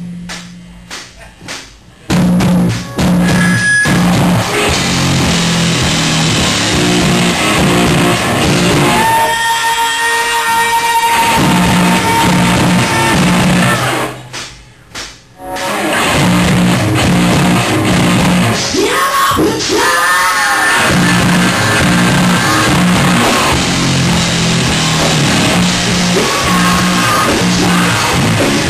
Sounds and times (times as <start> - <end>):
Music: 0.0 - 28.6
Bellow: 8.9 - 14.1.